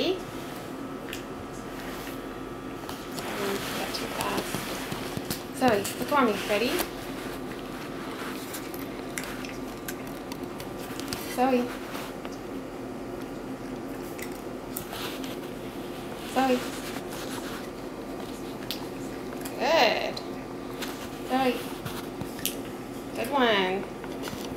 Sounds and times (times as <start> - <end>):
Speech: 3.2 - 4.6, 5.6 - 6.9, 11.3 - 11.8, 16.3 - 16.7, 19.6 - 20.2, 21.3 - 21.6, 23.2 - 23.9.